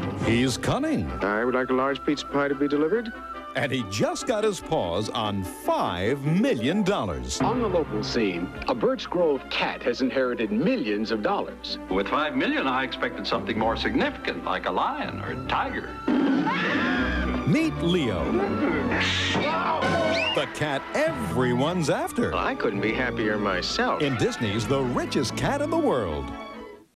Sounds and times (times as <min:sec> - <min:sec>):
Music: 0:00.0 - 0:26.9
Speech: 0:00.2 - 0:15.9, 0:17.5 - 0:18.5, 0:20.4 - 0:26.3.